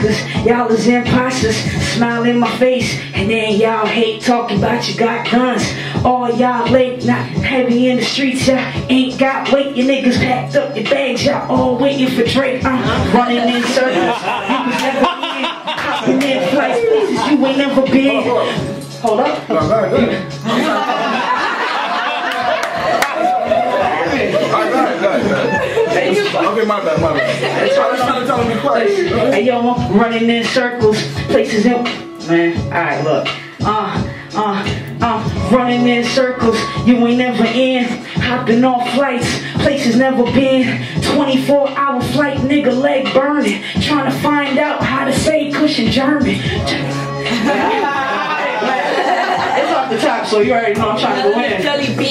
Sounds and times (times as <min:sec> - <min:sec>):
Hip hop music: 0:00.0 - 0:52.1.